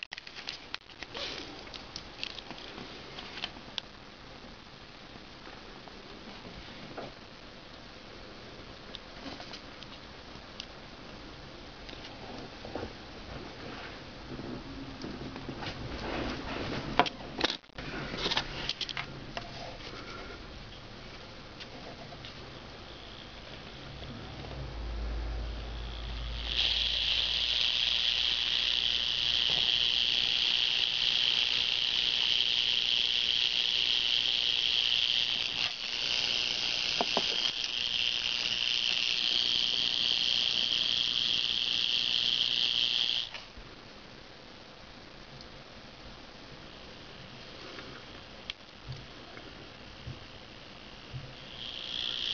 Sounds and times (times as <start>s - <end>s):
Inside, small room: 0.0s - 52.3s
Silence: 17.7s - 26.4s.